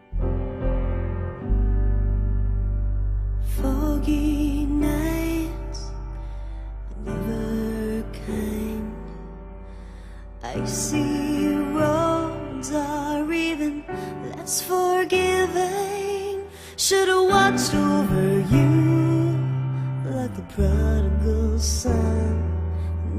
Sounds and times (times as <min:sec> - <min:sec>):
New-age music: 0:00.0 - 0:23.1
Soul music: 0:00.0 - 0:23.1.